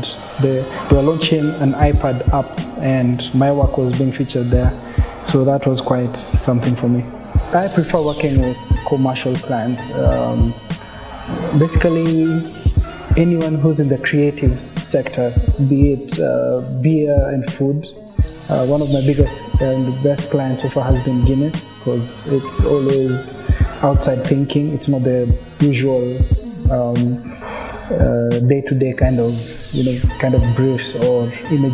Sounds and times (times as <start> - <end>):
Speech: 0.0 - 10.6, 11.3 - 31.7
Music: 0.0 - 31.7.